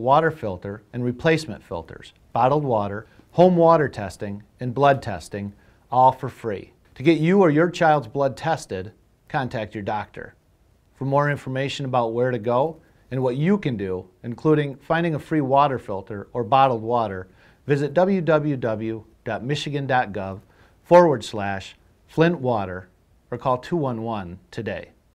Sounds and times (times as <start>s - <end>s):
Speech: 0.0s - 10.4s, 11.0s - 25.0s.